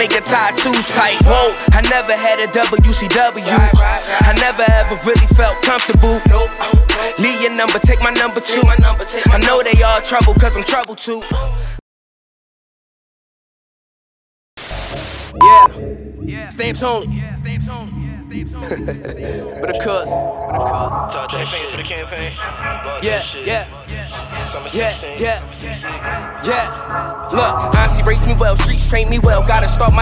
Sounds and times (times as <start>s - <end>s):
Music: 0.0s - 11.8s, 14.7s - 30.0s.